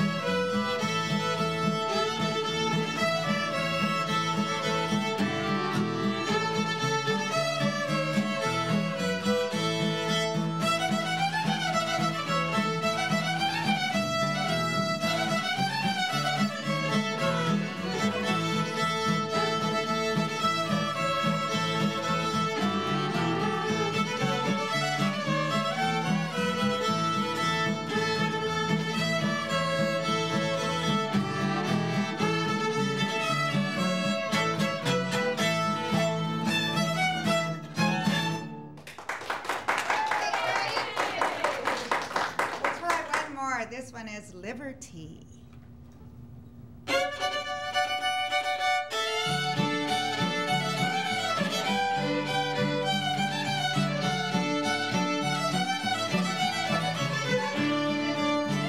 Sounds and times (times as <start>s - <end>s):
Pizzicato: 16.1s - 38.4s.